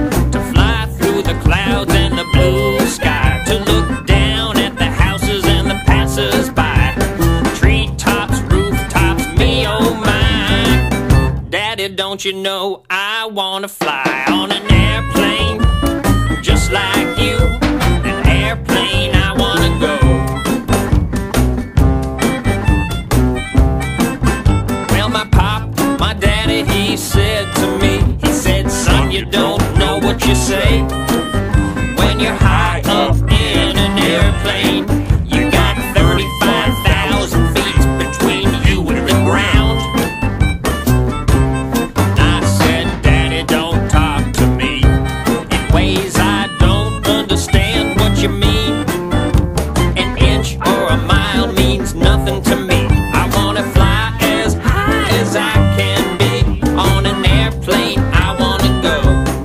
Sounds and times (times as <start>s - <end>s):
Music: 0.0s - 12.2s, 13.8s - 59.4s.